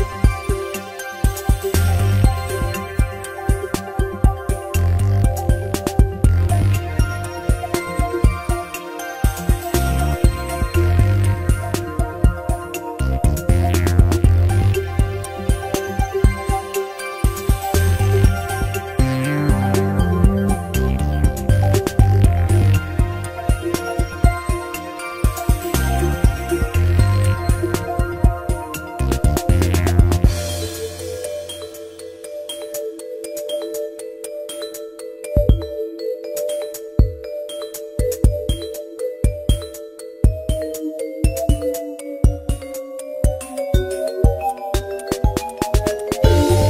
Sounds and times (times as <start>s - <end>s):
New-age music: 0.0s - 46.6s.